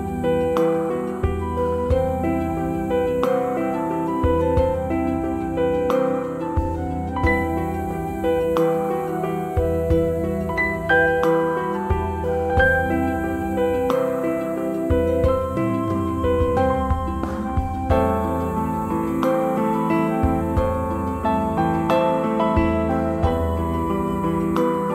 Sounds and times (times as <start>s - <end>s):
New-age music: 0.0s - 24.9s.